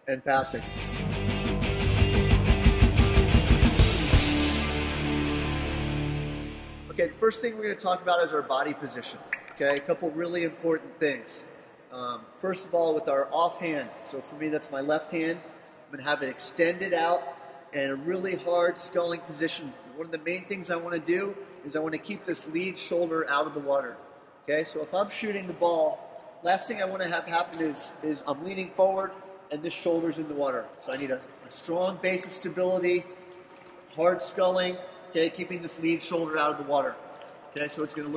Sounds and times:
Speech: 0:00.0 - 0:00.6, 0:06.9 - 0:17.2, 0:17.8 - 0:33.0, 0:33.9 - 0:37.0, 0:37.6 - 0:38.1.

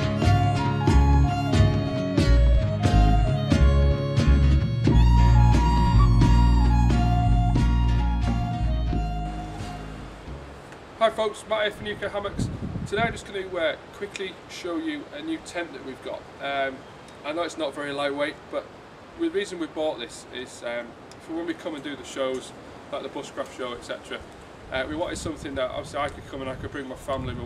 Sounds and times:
Music: 0:00.0 - 0:10.6
Speech: 0:11.0 - 0:27.4.

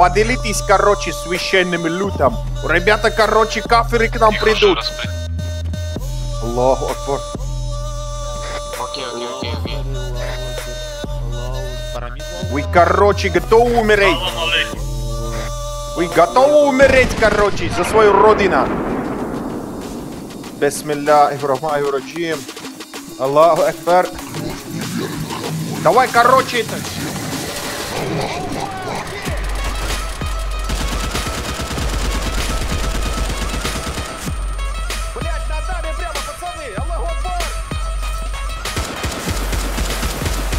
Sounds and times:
Speech: 0:00.0 - 0:05.1, 0:06.4 - 0:07.3, 0:08.8 - 0:10.0, 0:11.2 - 0:18.7, 0:20.6 - 0:22.5, 0:23.2 - 0:27.0, 0:35.2 - 0:37.5
Music: 0:00.0 - 0:40.5.

